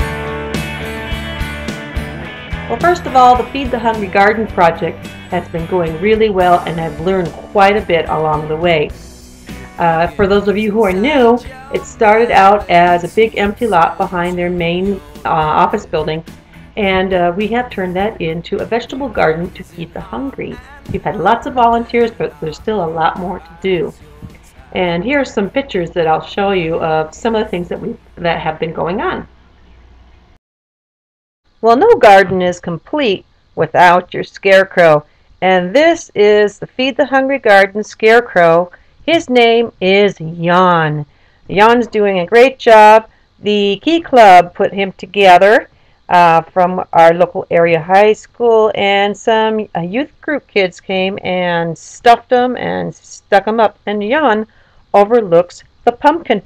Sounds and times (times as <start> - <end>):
Music: 0.0 - 30.4, 39.0 - 48.4
Speech: 2.7 - 9.1, 9.8 - 16.2, 16.8 - 24.1, 24.7 - 29.3, 31.6 - 56.4.